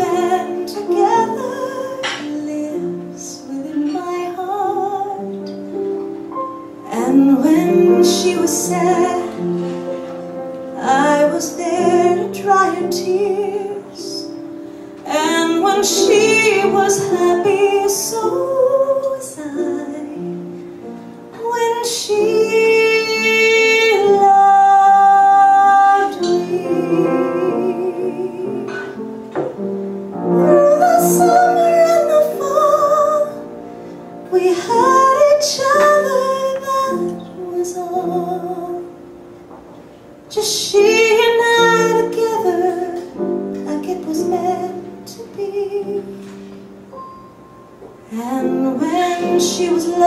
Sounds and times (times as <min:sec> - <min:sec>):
Inside, large room or hall: 0:00.0 - 0:50.0
Music: 0:00.0 - 0:50.0.